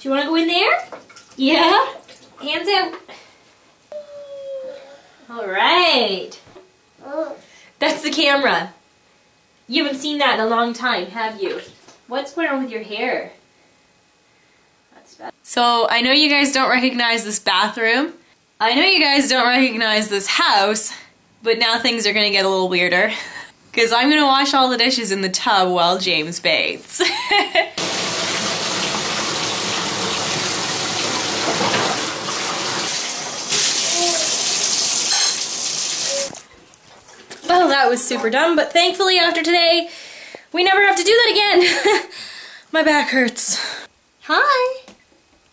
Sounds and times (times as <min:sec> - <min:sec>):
Bathtub (filling or washing): 0:00.0 - 0:03.3, 0:27.8 - 0:39.5
Water tap, faucet: 0:27.8 - 0:36.5.